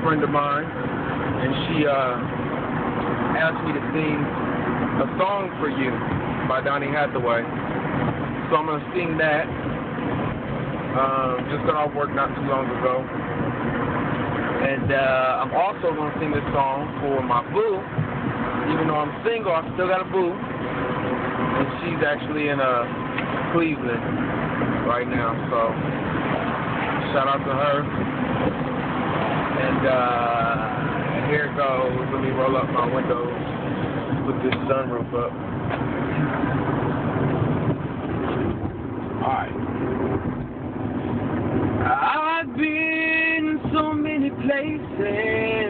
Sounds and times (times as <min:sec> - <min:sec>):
Speech: 0:00.0 - 0:00.7, 0:01.4 - 0:02.2, 0:03.4 - 0:04.3, 0:05.0 - 0:07.5, 0:08.5 - 0:09.5, 0:11.0 - 0:13.1, 0:14.6 - 0:17.9, 0:18.7 - 0:20.4, 0:21.6 - 0:22.9, 0:23.5 - 0:24.0, 0:24.8 - 0:25.8, 0:27.0 - 0:27.9, 0:29.6 - 0:33.4, 0:34.2 - 0:35.4, 0:39.2 - 0:39.6, 0:41.9 - 0:45.7.